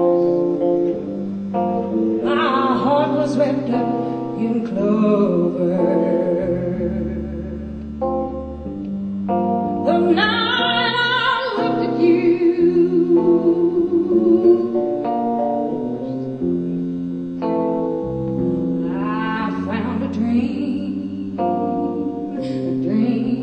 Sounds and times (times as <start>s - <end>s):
Guitar: 0.0s - 23.4s
Inside, large room or hall: 0.0s - 23.4s
Inside, public space: 0.0s - 23.4s.